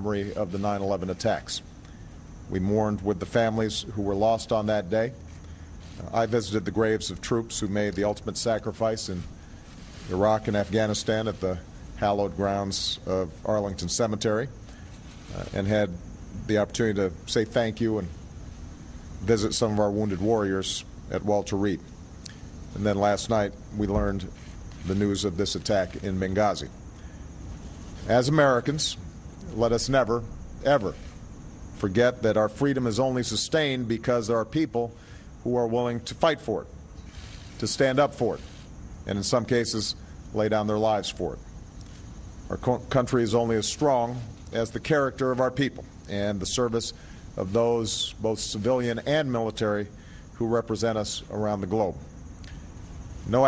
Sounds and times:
Male speech, man speaking: 0.0 - 1.6, 2.5 - 5.2, 6.0 - 9.3, 10.1 - 14.6, 15.3 - 18.2, 19.2 - 21.8, 22.8 - 26.7, 28.1 - 31.0, 31.8 - 36.7, 37.6 - 38.5, 39.1 - 41.4, 42.5 - 52.1
Narration, monologue: 0.0 - 53.4.

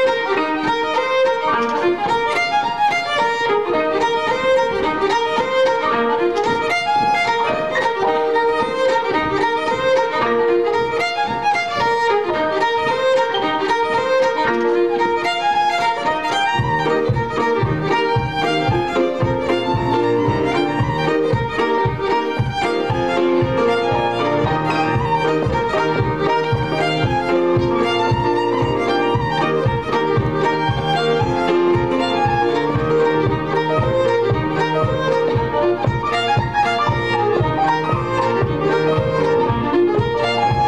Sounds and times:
Violin, fiddle: 0.0 - 40.6.

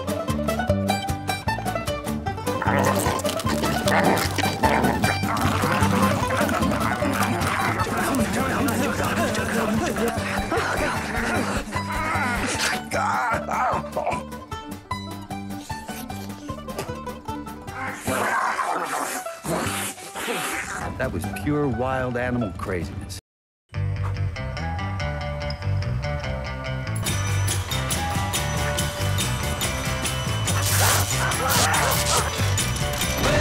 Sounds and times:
Music: 0.0 - 33.4.

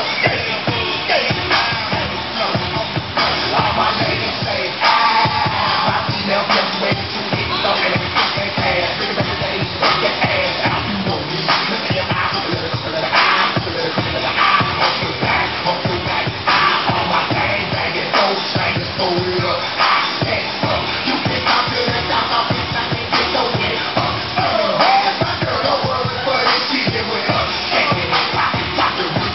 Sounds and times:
Inside, large room or hall: 0.0 - 29.3
Music: 0.0 - 29.3.

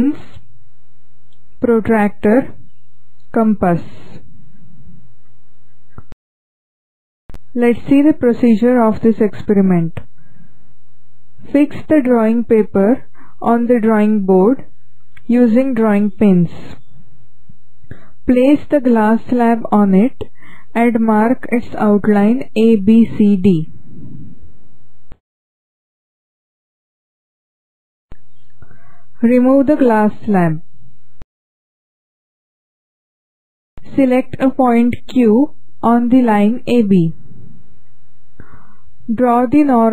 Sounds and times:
Speech: 0.0 - 0.4, 1.6 - 2.6, 3.3 - 4.0, 7.5 - 10.1, 11.5 - 16.8, 18.3 - 23.7, 29.2 - 30.6, 33.8 - 37.2, 39.1 - 39.9.

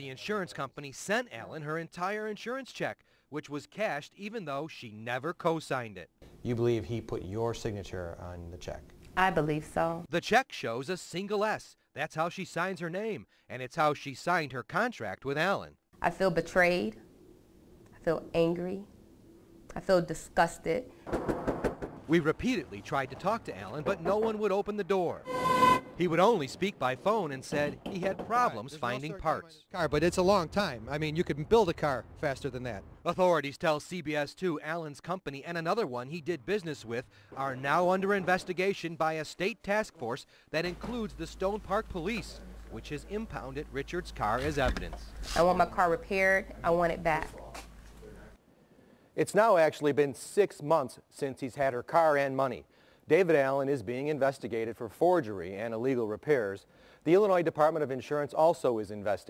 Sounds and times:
Speech: 0.0 - 17.0, 22.1 - 25.2, 26.0 - 48.4, 49.2 - 59.2.

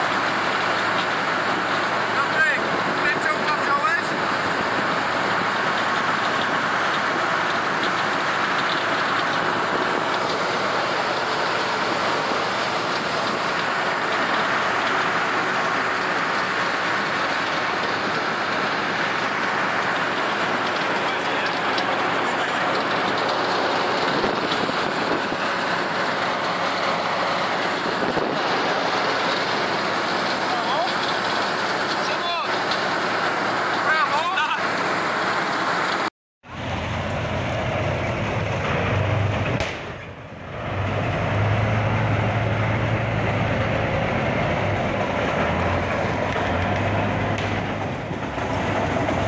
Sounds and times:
Speech: 2.2 - 4.2, 21.0 - 22.8, 30.4 - 31.0, 32.0 - 32.6, 33.8 - 34.7.

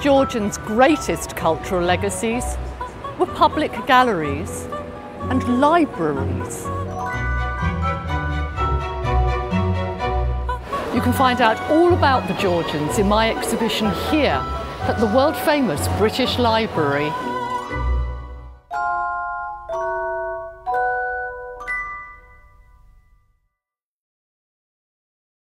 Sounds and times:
Music: 0.0 - 23.8
Speech: 5.3 - 6.6, 11.0 - 17.2.

